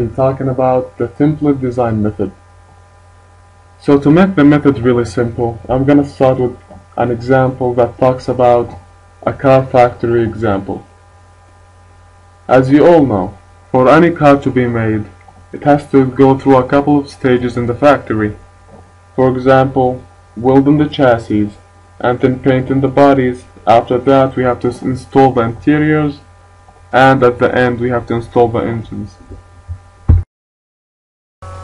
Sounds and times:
Speech: 0.0 - 2.4, 3.8 - 10.9, 12.5 - 18.5, 19.2 - 26.3, 26.9 - 29.4.

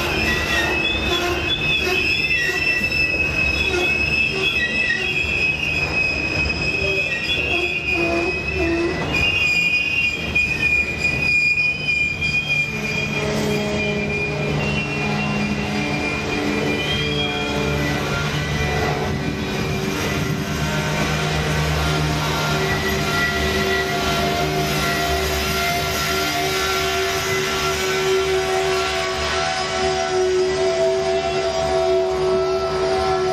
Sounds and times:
Railroad car, train wagon: 0.0 - 33.3
Train: 0.0 - 33.3
Train wheels squealing: 0.0 - 33.3.

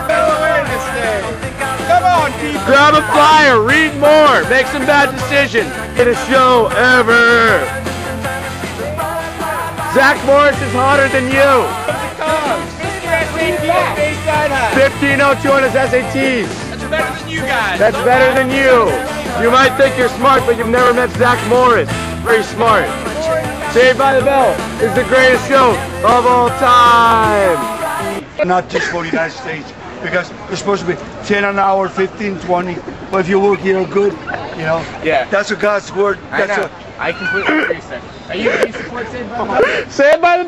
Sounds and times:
Music: 0.0 - 28.2.

